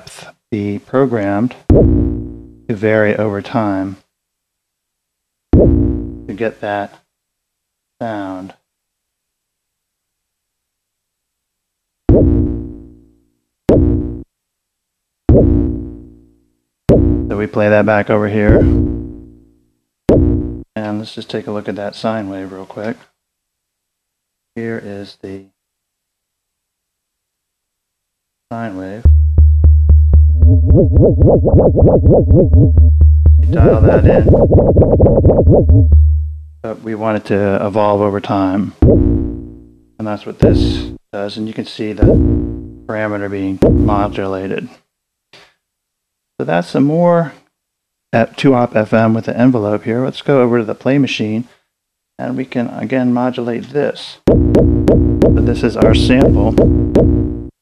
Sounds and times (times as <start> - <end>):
Speech: 0.0 - 1.7, 2.7 - 4.1, 6.3 - 7.0, 8.0 - 8.6, 17.3 - 18.8, 20.8 - 23.1, 24.6 - 25.6, 28.5 - 29.0, 33.5 - 34.3, 36.6 - 38.8, 40.0 - 42.2, 42.9 - 44.8, 46.4 - 47.4, 48.2 - 51.6, 52.2 - 54.3, 55.4 - 56.6.